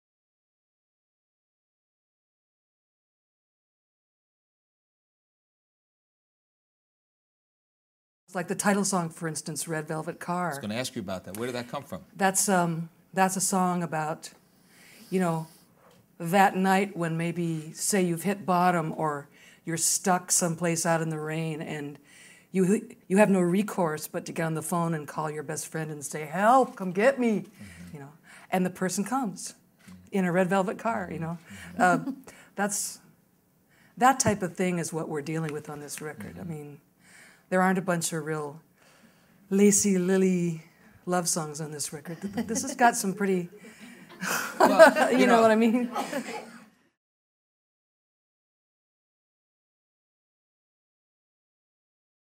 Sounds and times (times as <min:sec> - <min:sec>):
Speech: 0:08.3 - 0:14.4, 0:16.2 - 0:22.0, 0:22.6 - 0:33.0, 0:34.0 - 0:36.8, 0:37.5 - 0:38.6, 0:39.5 - 0:43.5, 0:44.7 - 0:46.1.